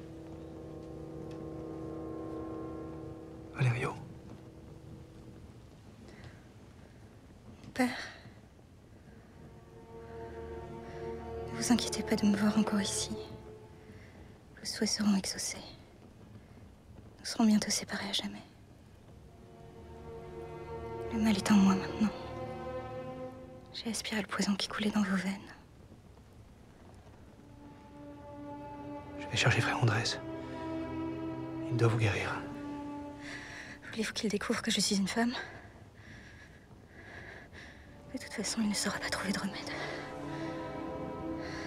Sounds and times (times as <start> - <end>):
Music: 0.0 - 41.6.